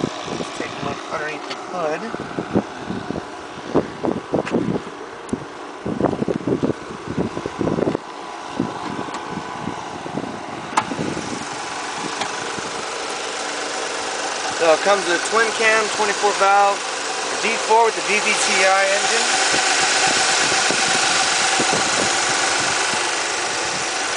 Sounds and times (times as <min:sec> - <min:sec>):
Outside, urban or manmade: 0:00.0 - 0:24.1
Vehicle: 0:00.0 - 0:24.1
Speech: 0:00.6 - 0:02.2, 0:14.6 - 0:16.8, 0:17.4 - 0:19.4.